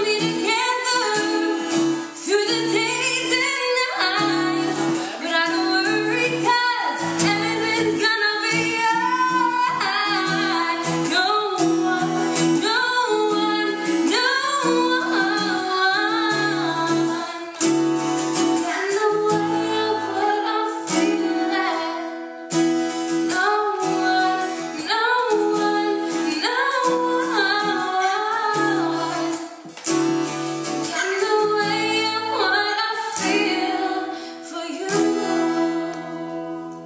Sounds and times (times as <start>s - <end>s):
Singing: 0.0s - 17.7s, 18.4s - 22.3s, 23.3s - 29.6s, 30.8s - 36.8s
Music: 0.0s - 36.8s.